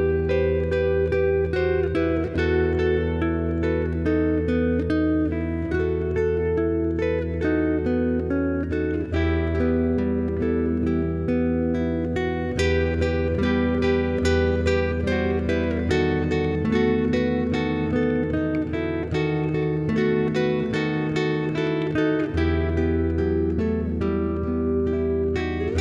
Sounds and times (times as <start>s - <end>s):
Acoustic guitar: 0.0s - 25.8s
Strum: 0.0s - 25.8s.